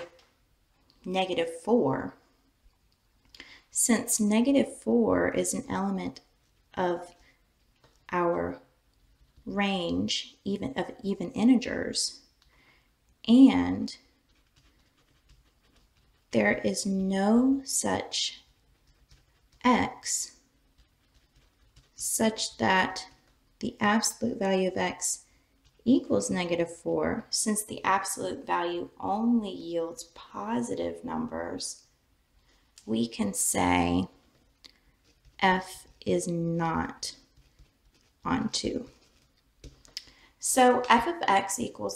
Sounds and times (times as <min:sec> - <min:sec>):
Inside, small room: 0:00.0 - 0:41.9
Speech: 0:01.0 - 0:02.2, 0:03.8 - 0:06.2, 0:06.8 - 0:07.1, 0:08.1 - 0:08.6, 0:09.5 - 0:12.2, 0:13.3 - 0:14.0, 0:16.4 - 0:18.4, 0:19.6 - 0:20.4, 0:22.0 - 0:25.2, 0:25.8 - 0:31.8, 0:32.8 - 0:34.1, 0:35.4 - 0:37.2, 0:38.3 - 0:38.9, 0:40.4 - 0:41.9.